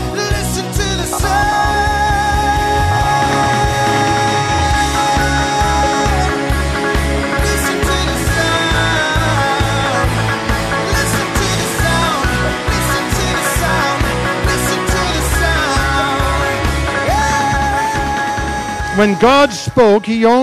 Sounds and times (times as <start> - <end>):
Music: 0.0 - 20.4.